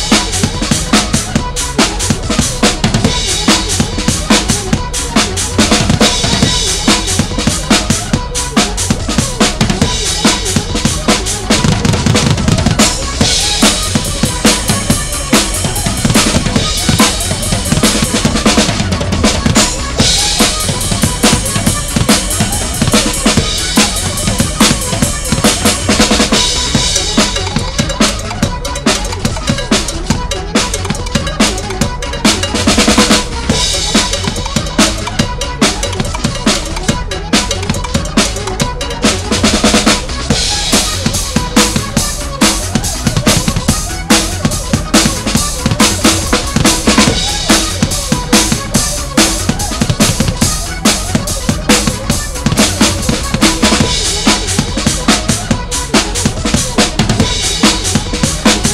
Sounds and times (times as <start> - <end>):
Drum: 0.0 - 58.7
Drum kit: 0.0 - 58.7.